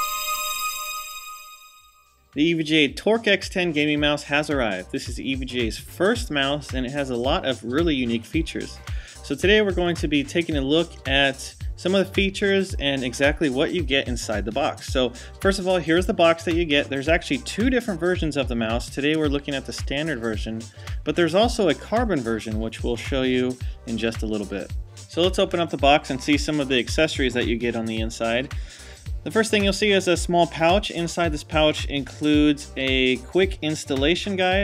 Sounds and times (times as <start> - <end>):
Music: 0.0 - 34.6
Speech: 2.4 - 28.5, 29.3 - 34.6.